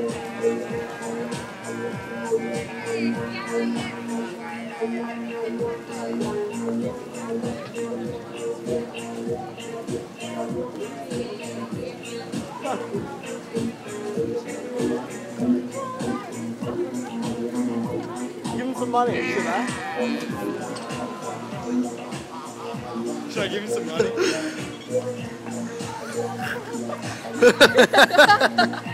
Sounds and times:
Music: 0:00.0 - 0:28.9
Female singing: 0:02.3 - 0:18.8, 0:24.6 - 0:27.9
Speech: 0:10.8 - 0:22.1.

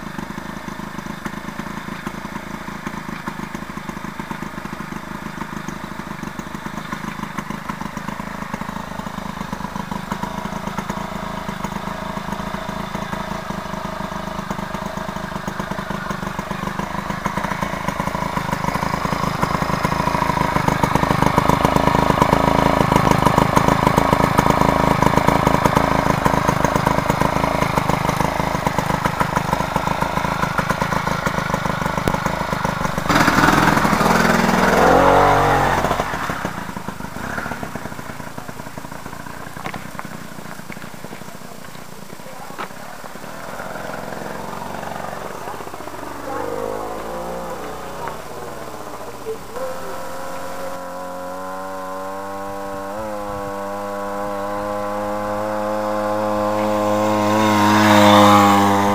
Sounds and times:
Vehicle: 0:00.0 - 0:58.9.

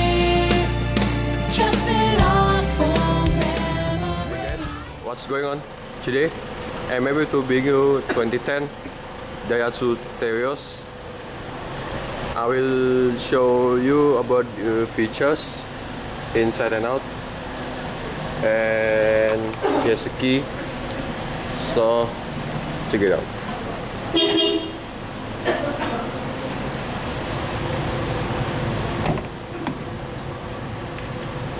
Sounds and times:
Vehicle: 0:00.0 - 0:31.5
Engine: 0:03.4 - 0:31.5
Speech: 0:05.0 - 0:08.8, 0:09.4 - 0:10.9, 0:12.4 - 0:15.7, 0:16.4 - 0:17.1, 0:18.4 - 0:20.5, 0:21.6 - 0:22.2, 0:22.9 - 0:23.3.

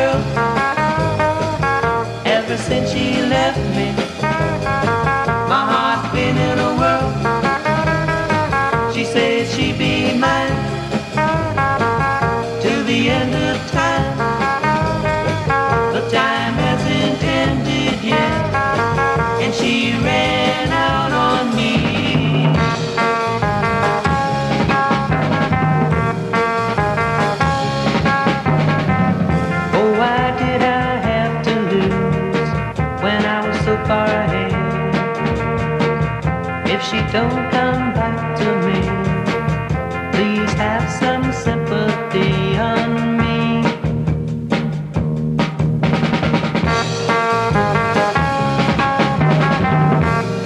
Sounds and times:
Music: 0:00.0 - 0:50.4.

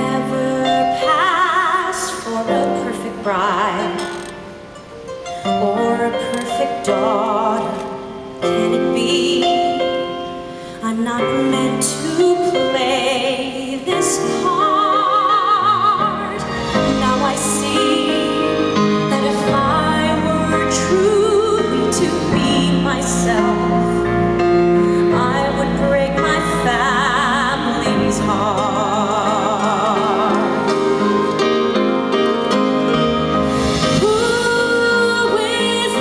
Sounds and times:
Female singing: 0:00.0 - 0:04.2, 0:05.6 - 0:09.8, 0:10.8 - 0:24.0, 0:25.1 - 0:30.8, 0:34.0 - 0:36.0
Music: 0:00.0 - 0:36.0.

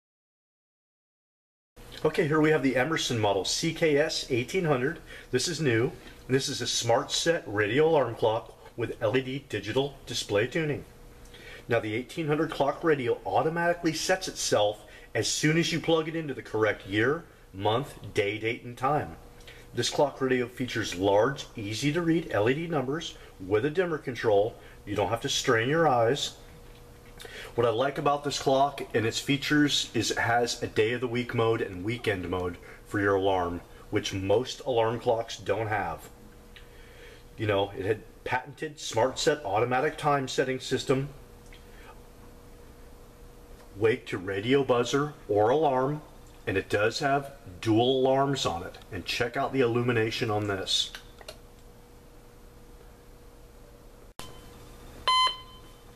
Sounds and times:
Speech: 0:02.0 - 0:10.9, 0:11.7 - 0:26.4, 0:27.5 - 0:36.2, 0:37.4 - 0:41.2, 0:43.7 - 0:51.1.

